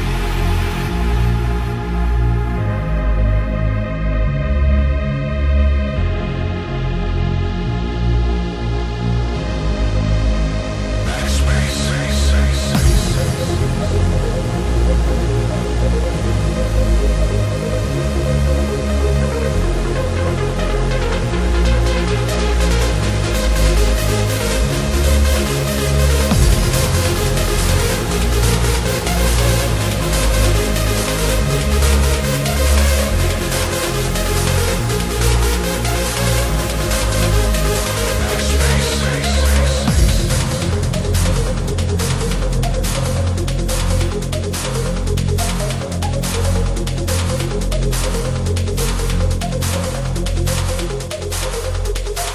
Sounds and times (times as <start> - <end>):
Techno: 0.0 - 52.3.